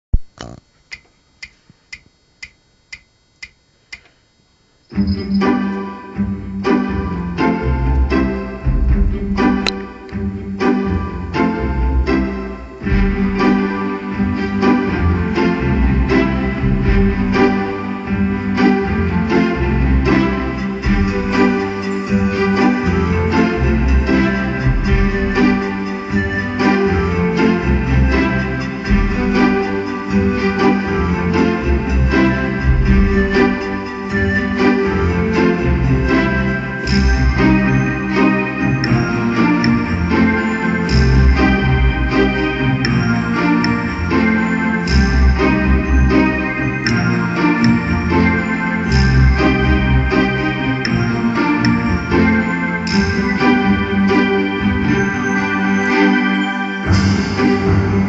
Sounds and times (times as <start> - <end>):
New-age music: 4.9 - 58.0.